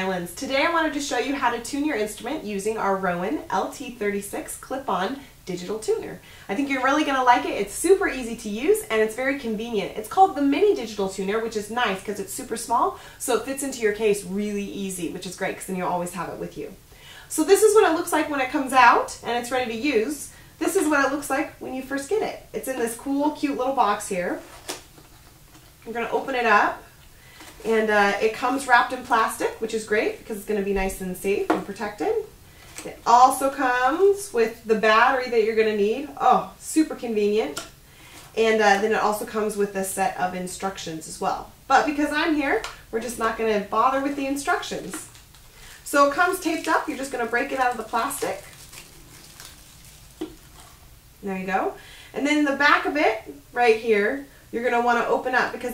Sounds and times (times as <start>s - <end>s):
Speech: 0.0s - 24.4s, 25.8s - 26.9s, 27.6s - 37.6s, 38.4s - 45.1s, 45.8s - 48.5s, 51.2s - 55.7s.